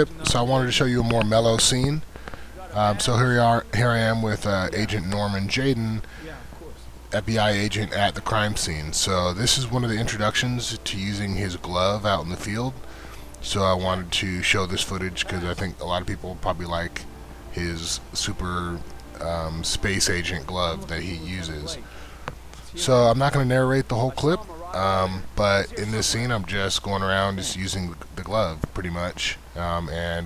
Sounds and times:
Speech: 0.0 - 2.0, 2.6 - 12.8, 13.4 - 21.9, 22.7 - 30.2.

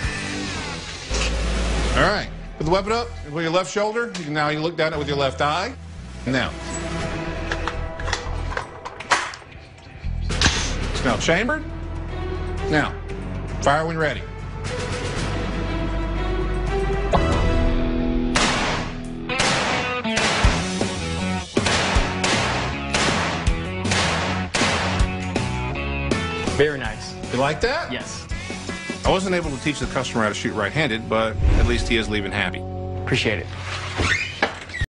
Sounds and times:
Music: 0.0 - 34.9
Speech: 2.0 - 6.6, 29.1 - 33.5.

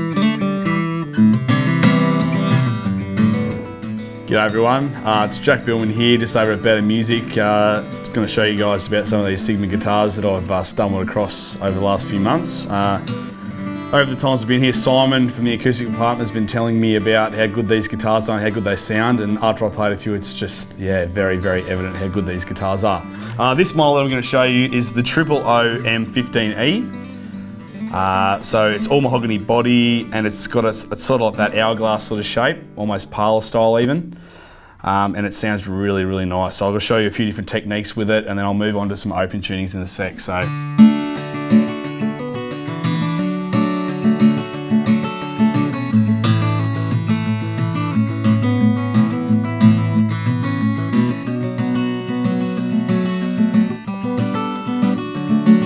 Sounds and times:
Plucked string instrument: 0.0 - 34.2, 40.4 - 55.6
Speech: 4.3 - 13.1, 13.9 - 27.0, 27.9 - 34.1, 34.8 - 40.5.

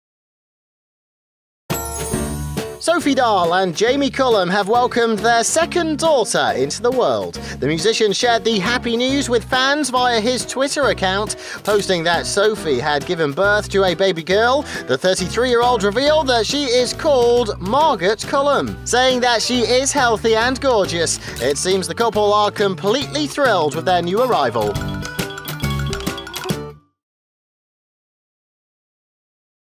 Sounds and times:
Music: 1.7 - 27.0
Speech: 2.8 - 24.8.

